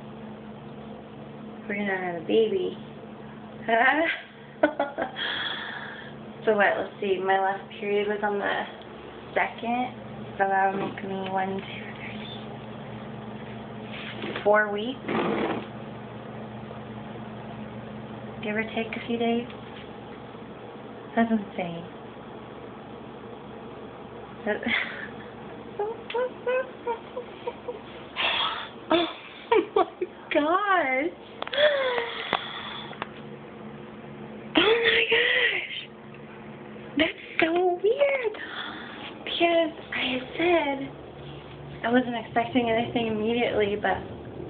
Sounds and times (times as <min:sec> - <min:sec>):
Inside, small room: 0:00.0 - 0:44.4
Speech: 0:01.6 - 0:02.8, 0:06.4 - 0:12.4, 0:14.4 - 0:15.0, 0:18.4 - 0:19.5, 0:21.1 - 0:21.9, 0:30.3 - 0:31.2, 0:37.0 - 0:38.4, 0:39.3 - 0:40.9, 0:41.8 - 0:44.1.